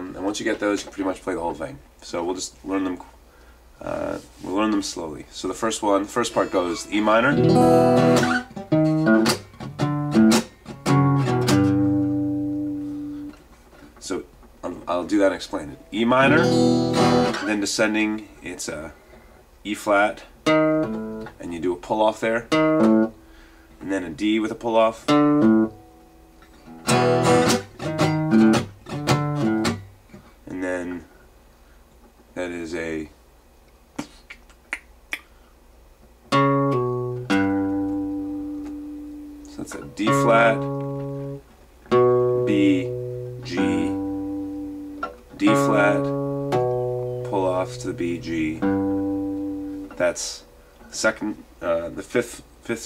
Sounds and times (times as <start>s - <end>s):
Speech: 0.0s - 3.2s, 3.8s - 7.4s, 14.0s - 16.6s, 17.4s - 19.0s, 19.6s - 20.4s, 21.3s - 22.5s, 23.8s - 25.1s, 30.4s - 31.1s, 32.4s - 33.2s, 39.5s - 40.7s, 42.5s - 42.9s, 43.5s - 44.0s, 45.4s - 46.1s, 47.2s - 48.7s, 50.0s - 52.8s
Strum: 5.5s - 14.1s, 15.2s - 17.7s, 25.1s - 30.4s, 36.3s - 51.1s.